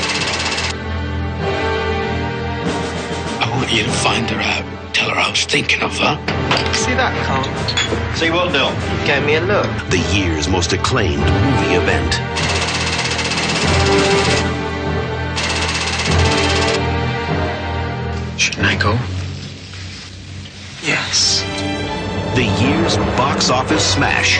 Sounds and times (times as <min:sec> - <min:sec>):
Music: 0:00.0 - 0:24.3
Speech: 0:03.4 - 0:06.2, 0:08.2 - 0:12.2, 0:18.4 - 0:19.1, 0:20.8 - 0:21.5, 0:22.3 - 0:24.3.